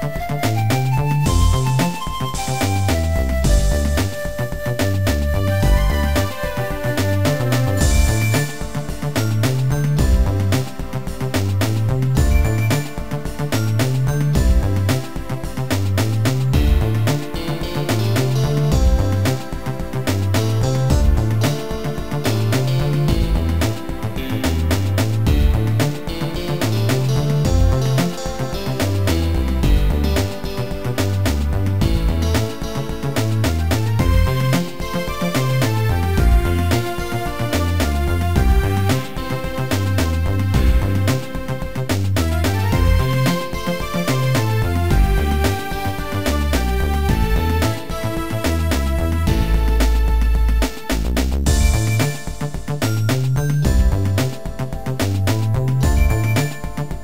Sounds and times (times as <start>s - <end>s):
Music: 0.0s - 57.0s.